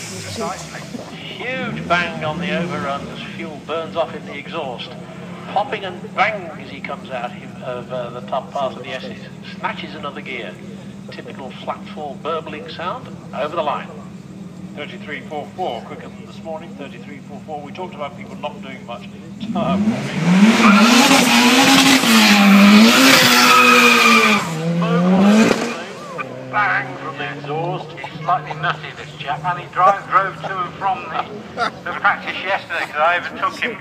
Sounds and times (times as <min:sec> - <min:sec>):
Car: 0:00.0 - 0:33.8
Speech: 0:00.1 - 0:14.1, 0:14.8 - 0:19.9, 0:24.8 - 0:33.8.